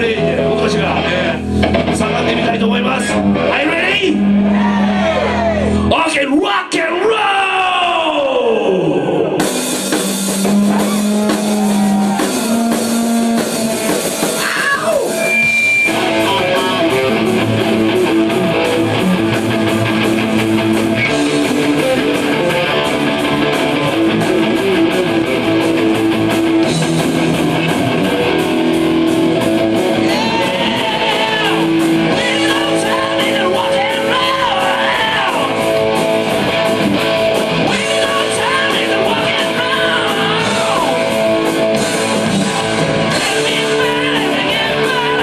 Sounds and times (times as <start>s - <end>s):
Rock and roll: 0.0s - 45.2s.